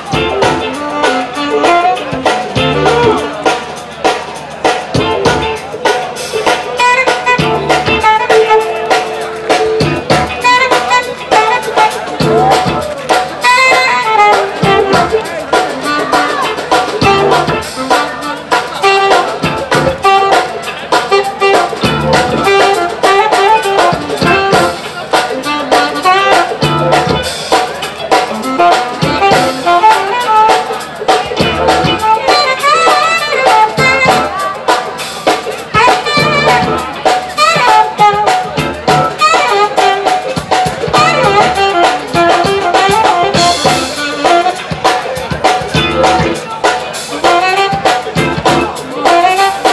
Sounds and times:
Music: 0:00.0 - 0:49.7.

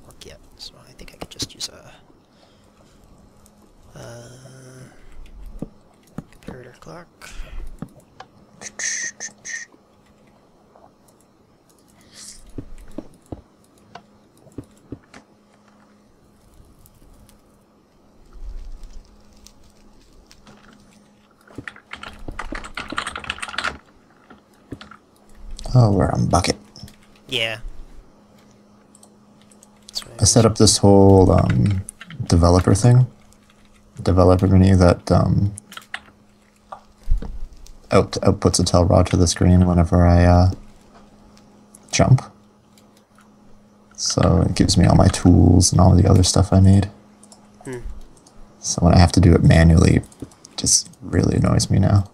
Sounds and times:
Speech: 0:00.0 - 0:02.0, 0:06.4 - 0:07.3, 0:25.6 - 0:26.6, 0:27.3 - 0:27.6, 0:29.9 - 0:33.1, 0:34.0 - 0:35.6, 0:37.9 - 0:40.6, 0:41.9 - 0:42.4, 0:44.0 - 0:47.0, 0:47.7 - 0:47.9, 0:48.6 - 0:52.1.

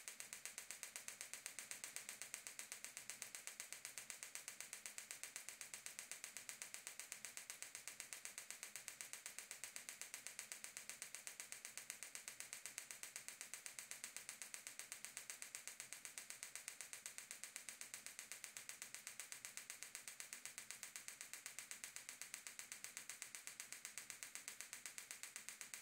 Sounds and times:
Inside, small room: 0:00.0 - 0:25.8.

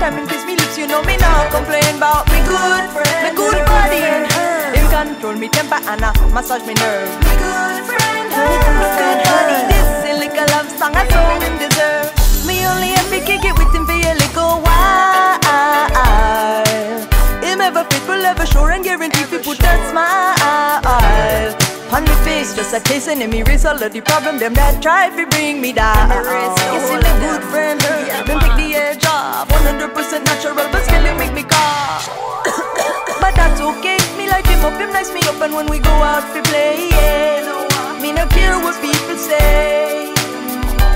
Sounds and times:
Reggae: 0:00.0 - 0:40.9.

